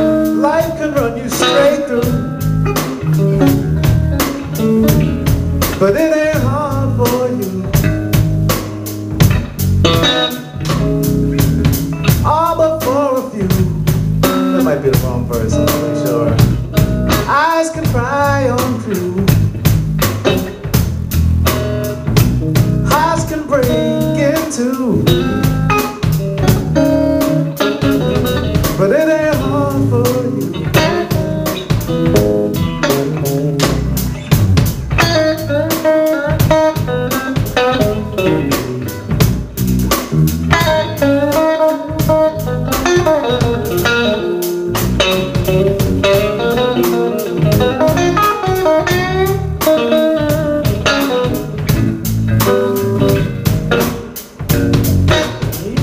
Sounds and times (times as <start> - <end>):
Music: 0.0 - 55.8
Speech: 14.6 - 16.4, 55.4 - 55.8.